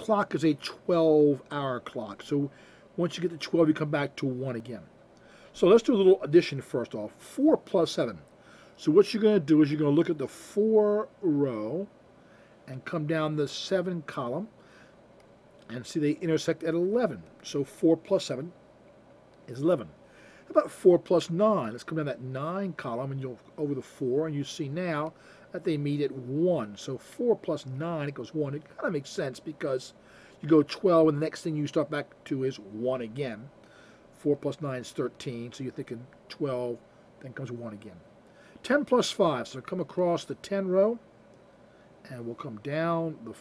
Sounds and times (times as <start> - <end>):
Speech: 0.0 - 4.9, 5.6 - 11.9, 12.7 - 14.5, 15.7 - 18.6, 19.5 - 33.5, 34.2 - 41.1, 42.0 - 43.4.